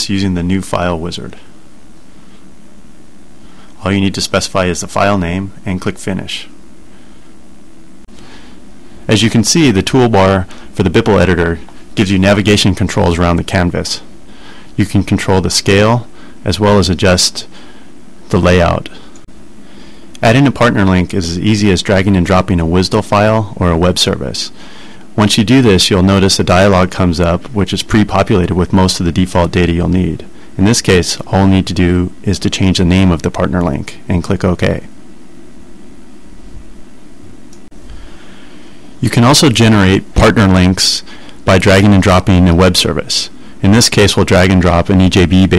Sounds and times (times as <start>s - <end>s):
Speech: 0.0s - 1.5s, 3.8s - 6.6s, 9.1s - 14.1s, 14.8s - 17.6s, 18.3s - 19.1s, 20.2s - 24.6s, 25.2s - 34.9s, 39.0s - 45.5s.